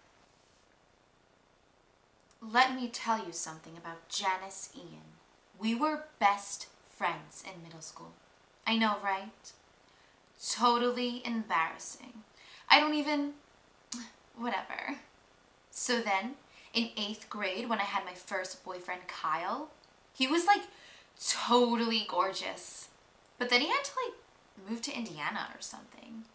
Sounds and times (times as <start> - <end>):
Speech: 2.4 - 9.5, 10.4 - 13.4, 14.0 - 15.1, 15.8 - 26.3.